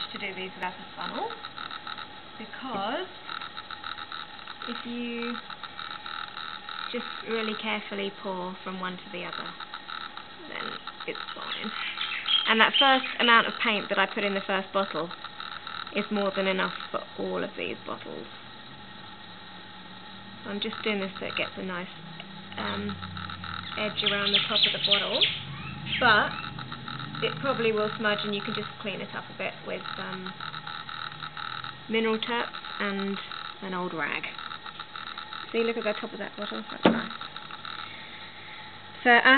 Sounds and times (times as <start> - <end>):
Speech: 0.0 - 1.4, 2.4 - 3.1, 4.7 - 5.4, 6.9 - 9.6, 12.5 - 15.1, 16.0 - 18.3, 20.5 - 21.9, 22.6 - 23.0, 23.8 - 25.3, 26.0 - 26.4, 27.2 - 30.3, 31.9 - 34.3, 35.6 - 37.1, 39.0 - 39.3.